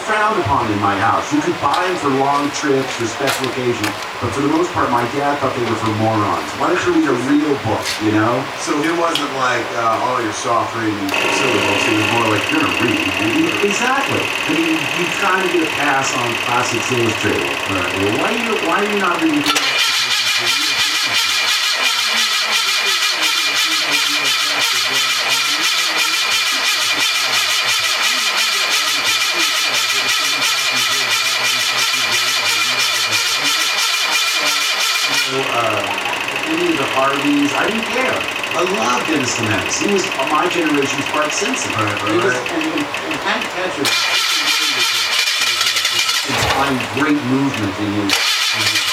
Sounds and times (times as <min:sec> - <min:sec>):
Speech: 0:00.0 - 0:48.9.